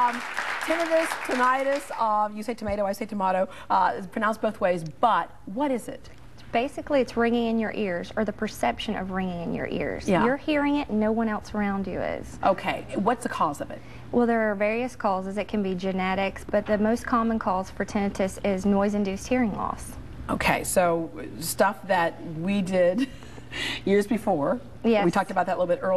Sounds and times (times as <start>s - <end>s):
Speech: 9.8s - 11.0s.